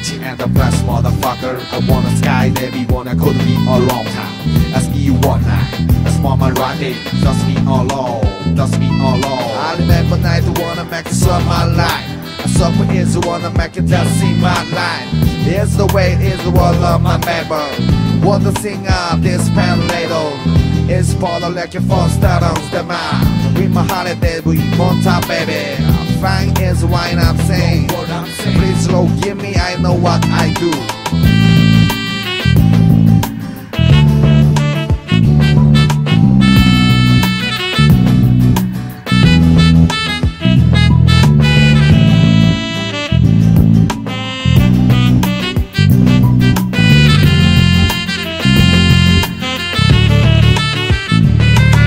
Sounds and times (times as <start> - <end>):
Swing music: 0.0 - 51.8.